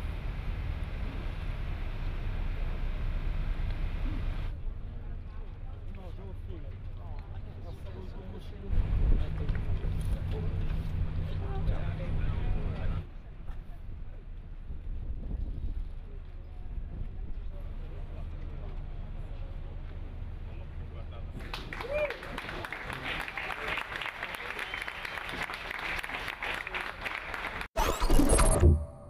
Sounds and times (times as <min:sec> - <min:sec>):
Speech: 0:04.9 - 0:14.3, 0:16.0 - 0:21.4.